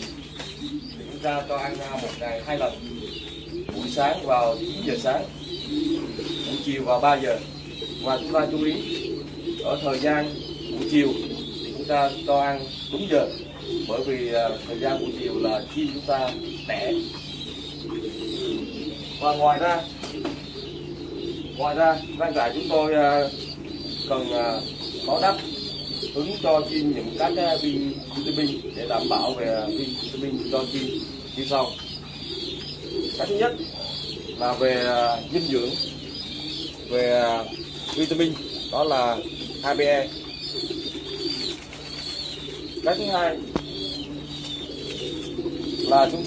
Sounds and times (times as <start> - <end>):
Pigeon, dove: 0.0 - 46.2
Speech: 1.0 - 2.8, 3.7 - 5.3, 6.5 - 8.9, 9.6 - 17.1, 19.2 - 19.9, 21.6 - 23.4, 24.1 - 25.5, 26.2 - 31.8, 33.2 - 33.6, 34.4 - 35.8, 36.9 - 40.2, 42.8 - 43.5, 45.9 - 46.2.